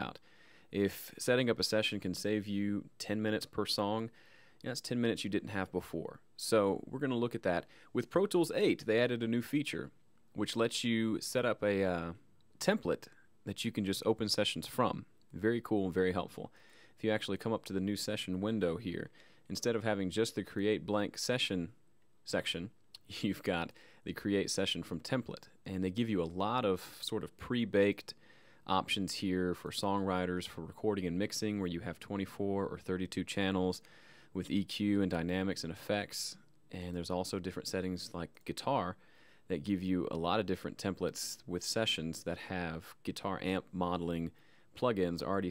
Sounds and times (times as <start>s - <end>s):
Speech: 0.0s - 45.5s.